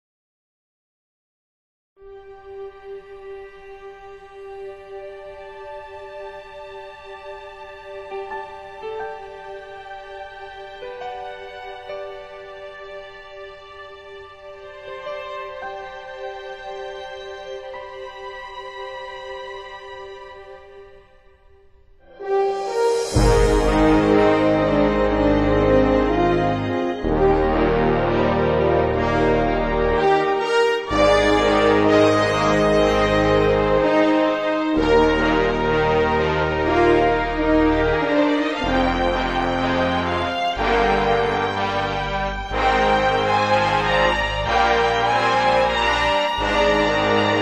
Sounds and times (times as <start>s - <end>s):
Music: 2.0s - 47.4s.